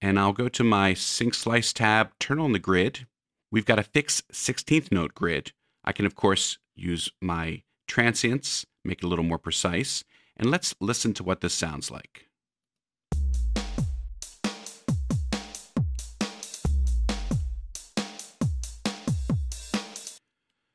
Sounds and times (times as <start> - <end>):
Speech: 0.0 - 12.3
Music: 13.1 - 20.2.